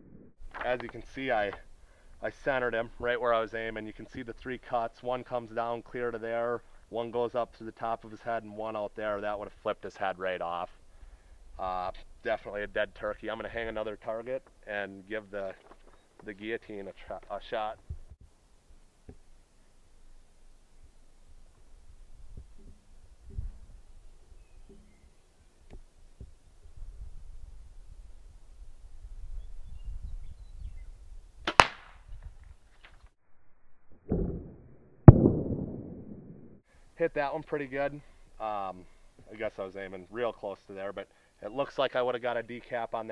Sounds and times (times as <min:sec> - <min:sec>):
Speech: 0:00.6 - 0:01.6, 0:02.2 - 0:10.8, 0:11.6 - 0:15.6, 0:16.2 - 0:17.8, 0:37.0 - 0:43.1
Arrow: 0:31.4 - 0:32.1, 0:34.1 - 0:35.9.